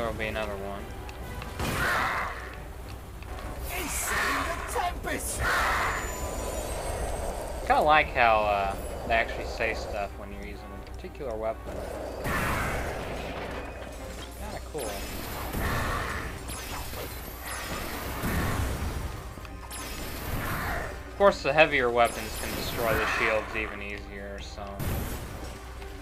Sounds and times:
Music: 0.0 - 26.0.

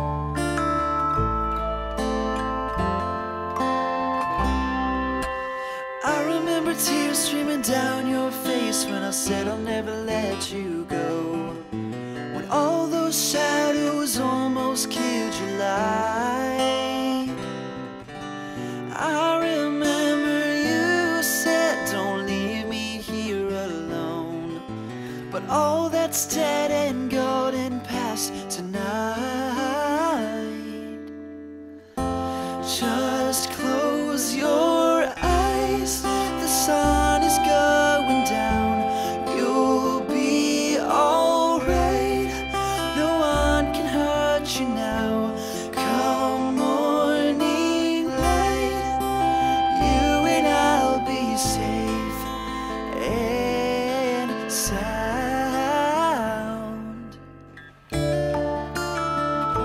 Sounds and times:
Music: 0.0 - 59.6.

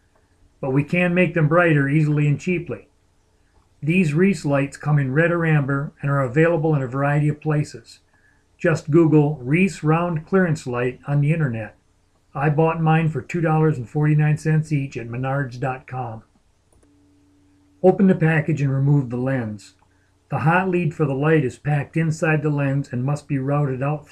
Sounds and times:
Speech: 0.6 - 2.9, 3.8 - 8.0, 8.6 - 11.8, 12.4 - 16.3, 17.8 - 24.1.

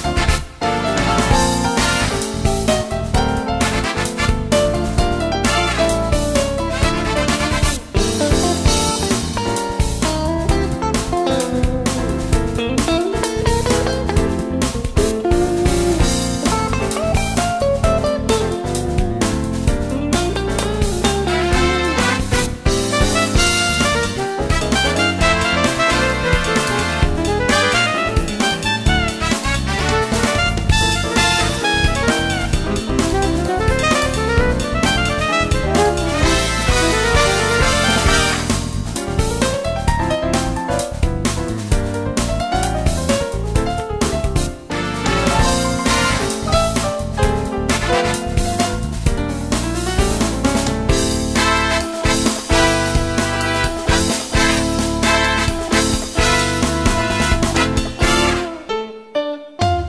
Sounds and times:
Music: 0.0 - 59.8.

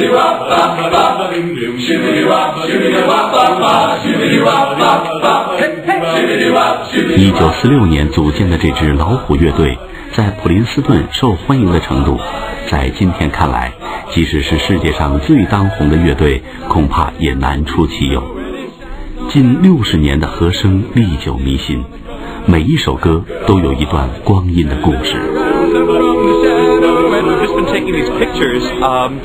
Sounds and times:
Speech: 7.1 - 18.4, 19.3 - 21.9, 22.5 - 25.4, 26.6 - 29.2.

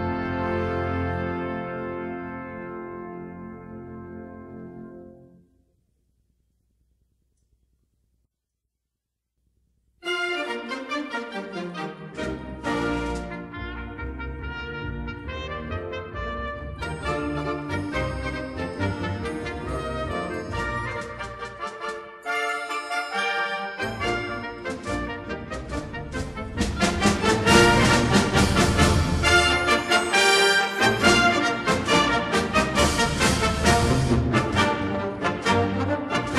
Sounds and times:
Trombone: 0.0 - 5.2, 12.6 - 36.3
Trumpet: 0.0 - 5.5, 10.0 - 36.3.

